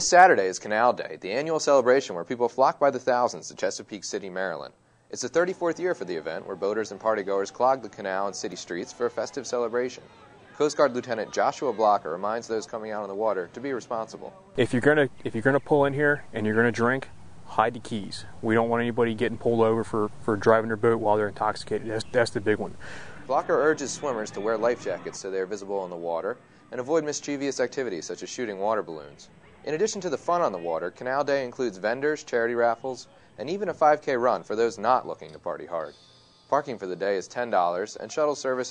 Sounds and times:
Speech: 0.0s - 35.9s, 36.5s - 38.7s.

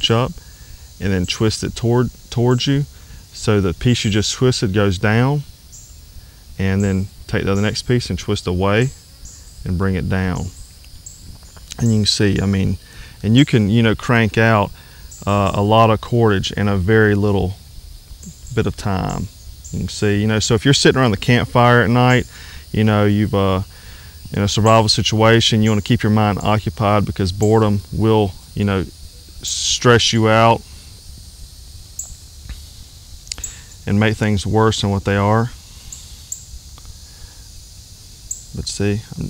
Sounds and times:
Speech: 0.0s - 0.4s, 1.0s - 5.5s, 6.6s - 9.0s, 9.7s - 10.6s, 11.7s - 17.6s, 18.3s - 23.7s, 24.3s - 30.7s, 33.9s - 35.6s, 38.6s - 39.2s.

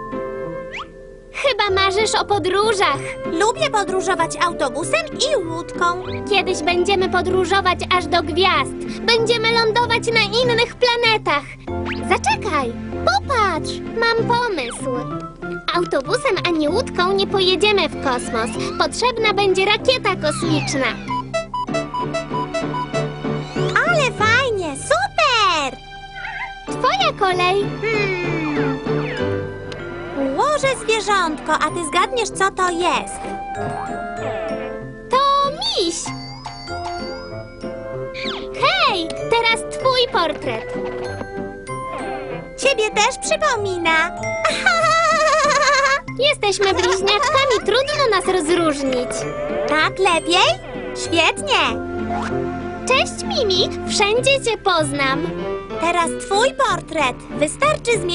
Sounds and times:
Music: 0.0s - 58.1s
Child speech, kid speaking: 1.4s - 21.1s, 23.7s - 25.8s, 26.7s - 28.4s, 30.2s - 33.2s, 35.1s - 36.1s, 38.5s - 40.7s, 42.6s - 44.2s, 46.1s - 51.8s, 52.9s - 58.1s.

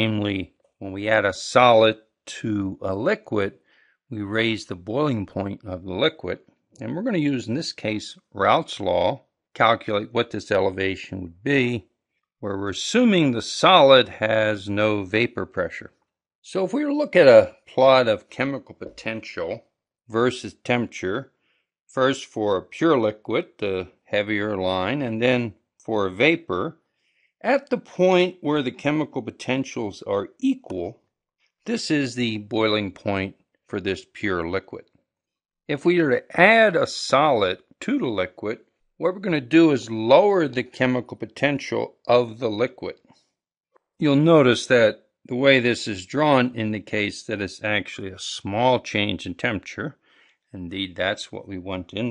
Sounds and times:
Speech: 0.0s - 11.8s, 12.4s - 15.9s, 16.5s - 21.3s, 21.9s - 26.8s, 27.4s - 31.0s, 31.7s - 34.8s, 35.7s - 43.0s, 44.0s - 50.0s, 50.6s - 52.1s.

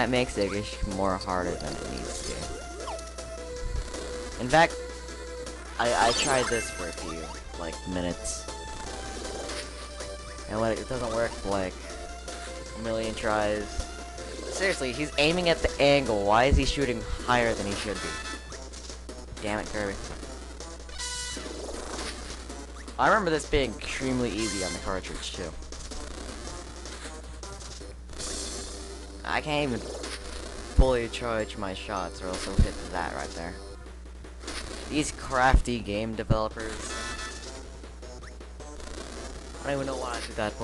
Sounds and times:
Speech: 0.0s - 2.6s, 4.4s - 4.7s, 5.8s - 8.4s, 10.5s - 11.7s, 12.8s - 13.7s, 14.6s - 18.2s, 19.4s - 20.0s, 23.0s - 25.6s, 29.3s - 29.9s, 30.8s - 33.6s, 34.9s - 36.9s, 39.6s - 40.6s
Music: 0.0s - 40.6s.

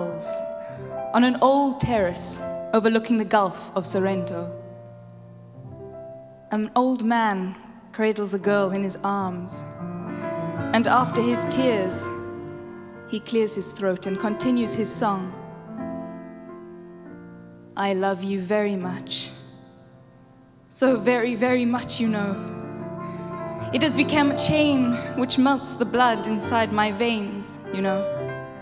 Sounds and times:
Speech: 1.2s - 4.6s, 6.5s - 9.6s, 10.8s - 12.2s, 13.1s - 15.4s, 17.8s - 19.4s, 20.7s - 22.4s, 23.7s - 28.1s.

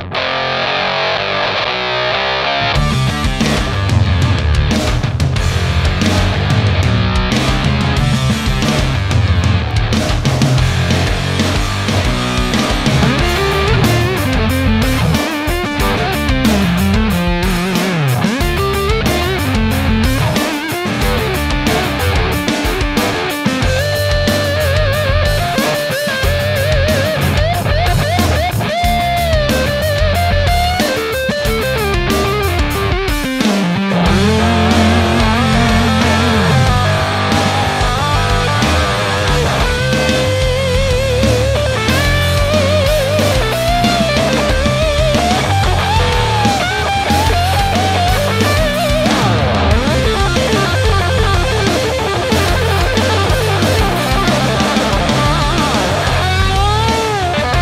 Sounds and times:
Guitar: 0.0s - 57.6s
Heavy metal: 0.0s - 57.6s.

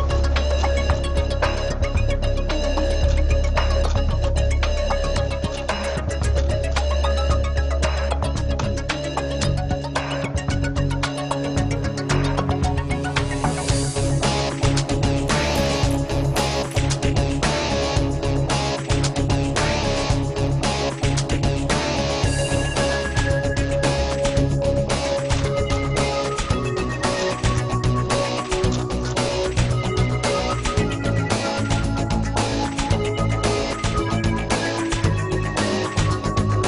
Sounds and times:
Music: 0.0s - 36.6s.

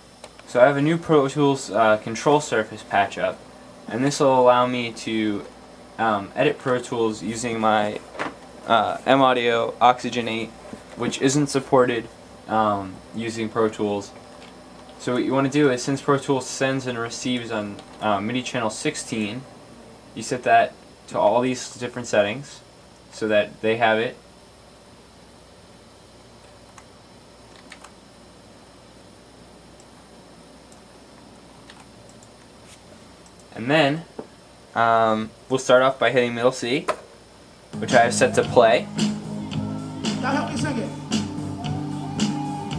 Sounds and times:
Speech: 0.5s - 8.0s, 8.7s - 14.1s, 15.0s - 19.4s, 20.2s - 24.2s, 33.5s - 34.1s, 34.8s - 36.9s, 37.8s - 38.8s, 40.2s - 40.9s
Music: 37.8s - 42.7s.

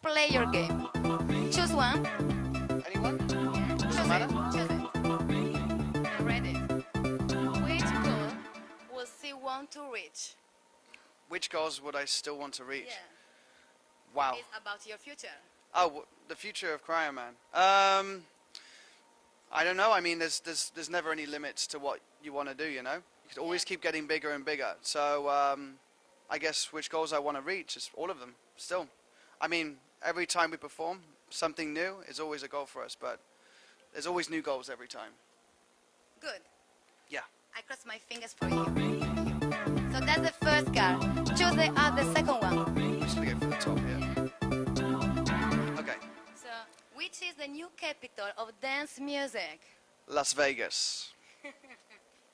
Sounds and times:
Speech: 0.0s - 0.8s, 1.6s - 2.0s, 2.9s - 3.2s, 3.8s - 4.8s, 6.1s - 6.6s, 40.0s - 42.6s, 43.2s - 44.0s
Music: 0.0s - 10.7s, 38.4s - 46.8s.

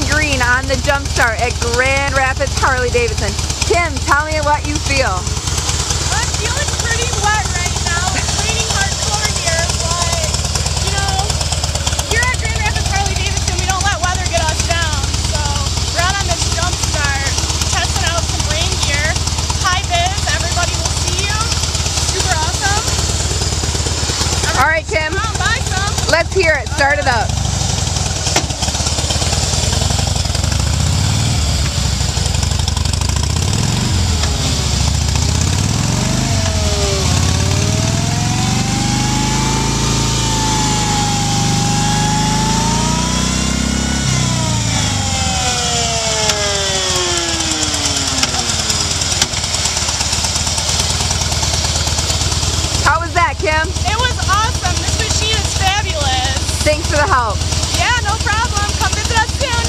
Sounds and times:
Speech: 0.0s - 5.3s, 6.1s - 11.3s, 12.1s - 21.5s, 22.2s - 22.9s, 24.5s - 27.3s, 52.8s - 59.6s.

